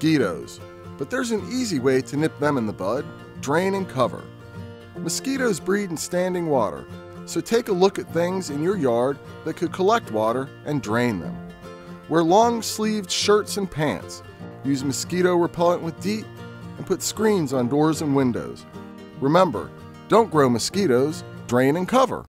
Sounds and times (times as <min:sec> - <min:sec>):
Speech: 0:00.0 - 0:04.3, 0:05.0 - 0:11.4, 0:12.1 - 0:18.6, 0:19.2 - 0:22.2
Music: 0:00.0 - 0:22.2.